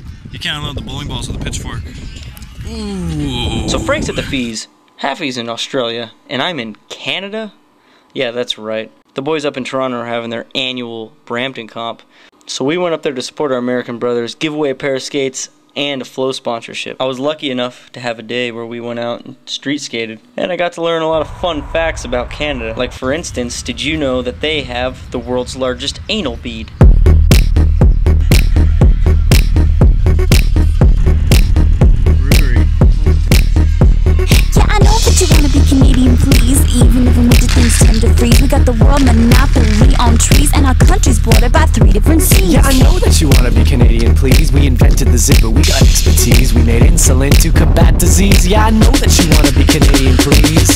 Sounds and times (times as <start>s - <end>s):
Speech: 0.3s - 7.6s, 8.2s - 26.8s, 32.2s - 32.6s, 34.3s - 50.7s.